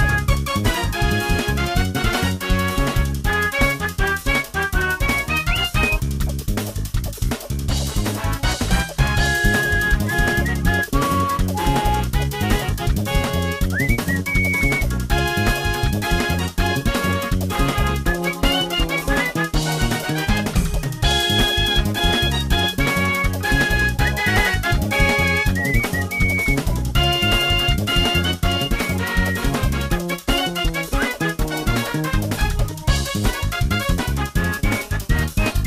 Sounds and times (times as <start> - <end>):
Video game music: 0.0 - 6.4, 7.8 - 35.6.